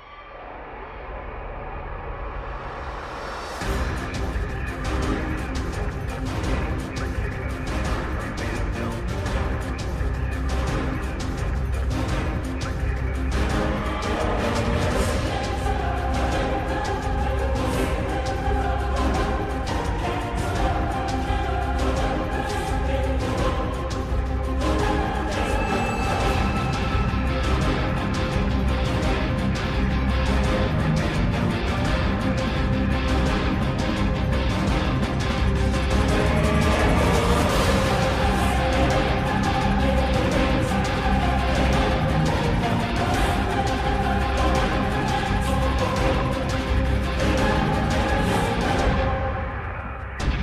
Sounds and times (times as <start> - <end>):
Exciting music: 0.0 - 50.4.